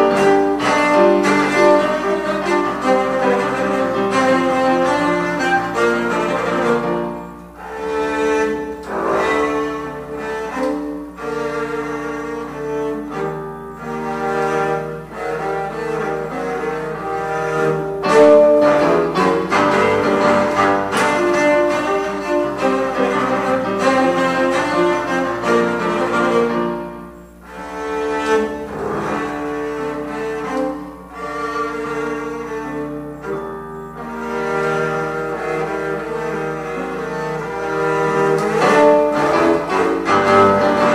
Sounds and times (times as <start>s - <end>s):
Double bass: 0.0s - 40.9s.